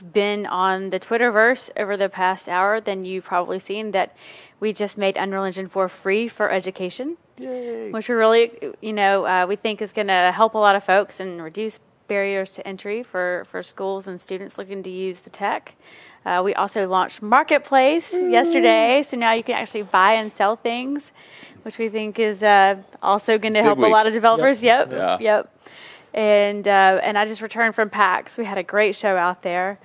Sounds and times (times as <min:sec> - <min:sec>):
Speech: 0:06.8 - 0:09.4, 0:16.3 - 0:20.0, 0:21.7 - 0:25.4.